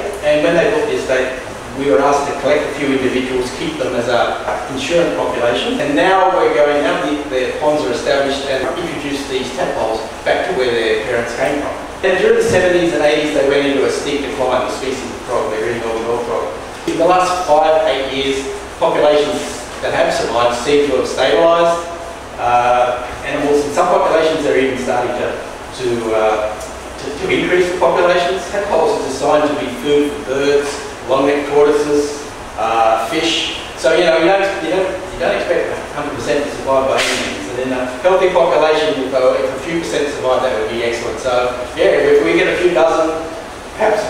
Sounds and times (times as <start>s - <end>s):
Speech: 0.0s - 44.0s.